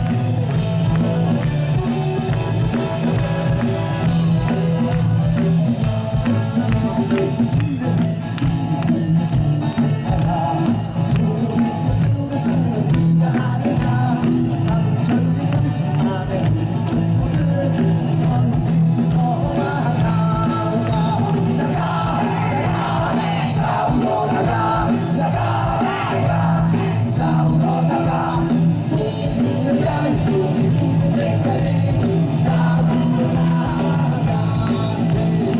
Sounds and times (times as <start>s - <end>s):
Music: 0.0s - 35.6s.